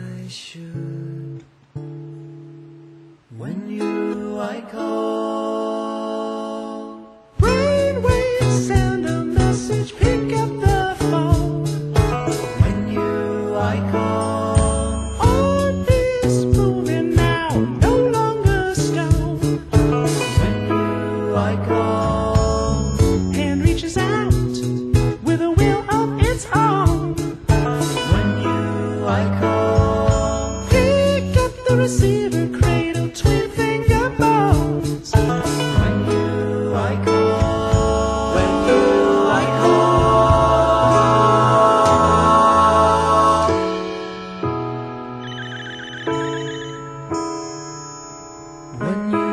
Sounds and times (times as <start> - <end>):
Blues: 7.4 - 47.4.